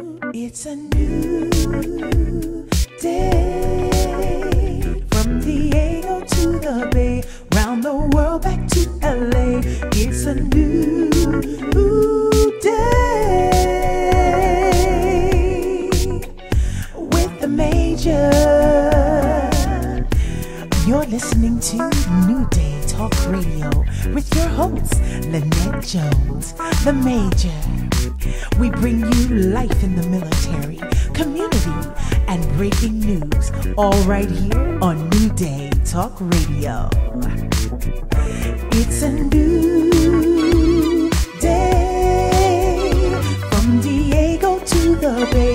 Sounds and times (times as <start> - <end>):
Music: 0.0 - 45.5
Speech: 20.8 - 27.8, 28.6 - 37.4.